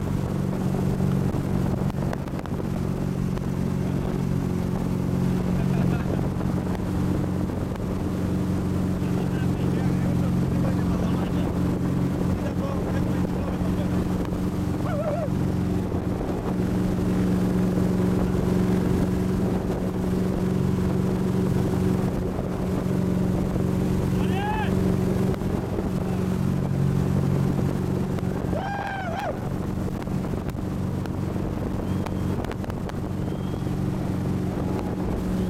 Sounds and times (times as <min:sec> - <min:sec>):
Speech: 0:09.0 - 0:11.6, 0:12.4 - 0:14.0, 0:24.2 - 0:24.8.